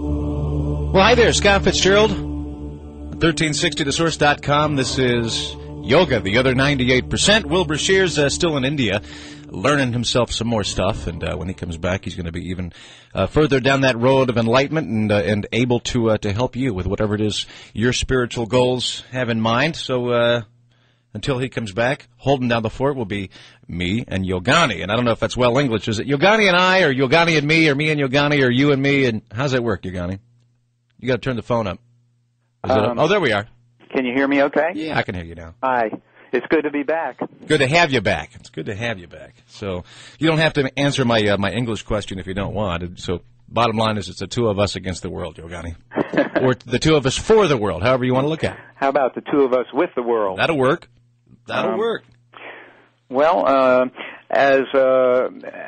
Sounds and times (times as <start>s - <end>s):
Speech: 3.2s - 20.5s, 21.2s - 30.2s, 32.6s - 45.8s, 46.4s - 50.9s, 51.5s - 55.6s.